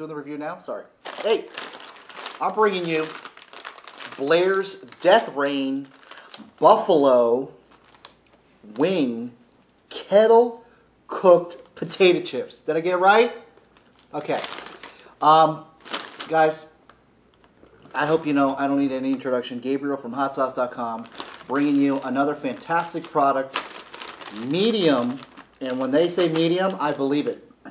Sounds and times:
Speech: 0.0 - 1.5, 2.4 - 3.2, 4.2 - 5.9, 6.5 - 7.6, 8.6 - 13.5, 14.1 - 14.5, 15.2 - 16.8, 17.9 - 23.6, 24.3 - 27.7.

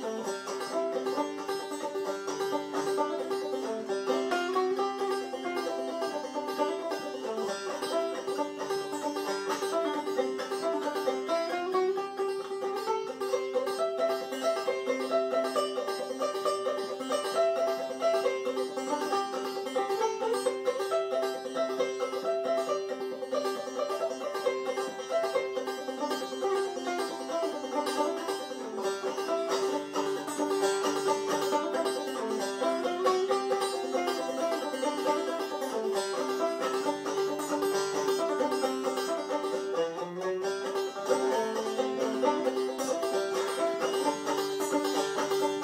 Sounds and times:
Banjo: 0.0 - 45.6.

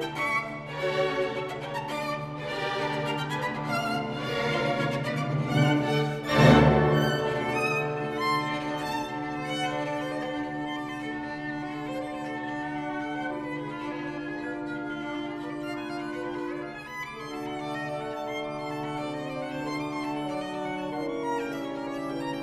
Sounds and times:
Violin, fiddle: 0.0 - 22.4.

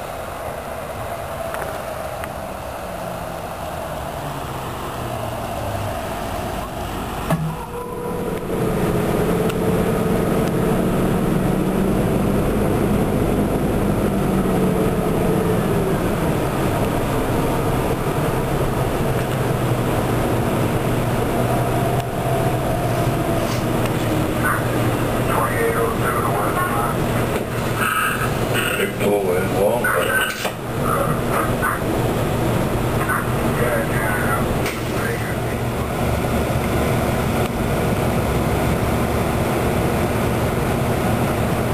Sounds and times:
Vehicle: 0.0 - 41.7
Speech: 24.4 - 27.1, 28.6 - 31.9, 33.0 - 35.7.

